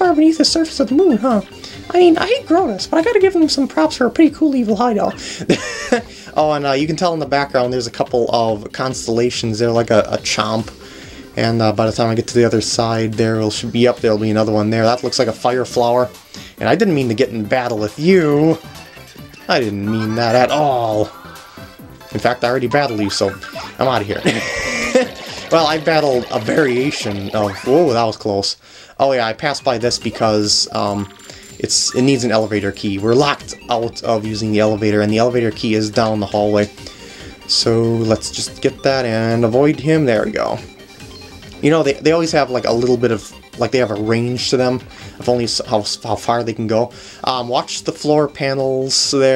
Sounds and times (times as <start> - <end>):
Speech: 0.0 - 5.2, 6.4 - 10.7, 11.4 - 18.6, 19.5 - 21.1, 22.1 - 24.3, 25.5 - 36.7, 37.5 - 40.7, 41.6 - 49.3.